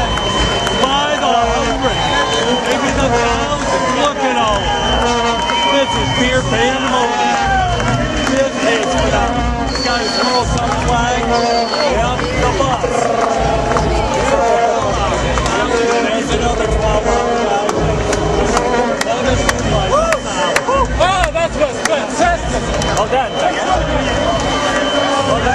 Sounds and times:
Music: 0.0s - 25.5s
Outside, urban or manmade: 0.0s - 25.5s
Speech: 0.8s - 7.6s, 8.3s - 25.5s.

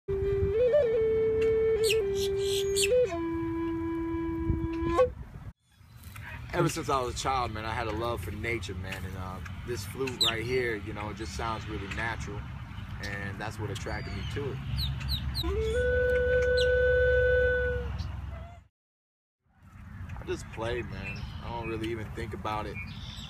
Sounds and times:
Music: 0.1s - 5.2s
Outside, rural or natural: 0.1s - 18.7s, 19.4s - 23.2s.

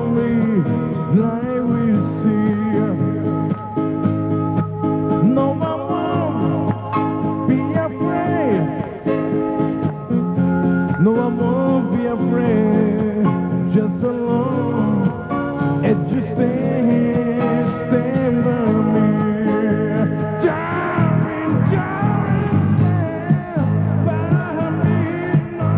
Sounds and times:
Male singing: 0.0s - 3.2s, 5.2s - 9.0s, 11.0s - 15.2s, 15.8s - 25.7s
Music: 0.0s - 25.7s.

